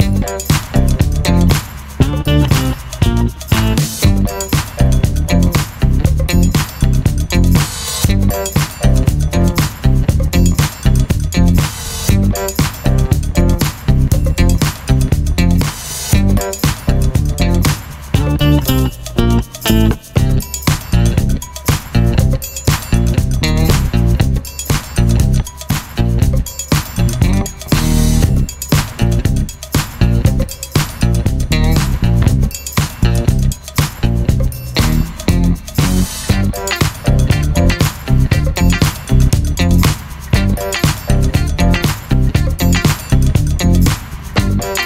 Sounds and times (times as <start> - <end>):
Musical instrument: 0.0 - 44.8.